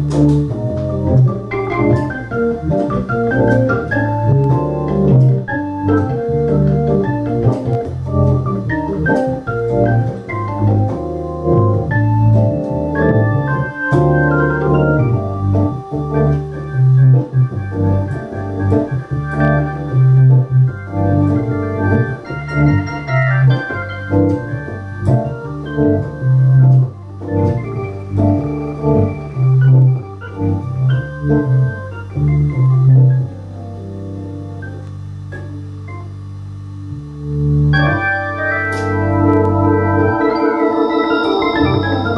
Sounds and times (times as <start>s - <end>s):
Hammond organ: 0.0s - 42.1s.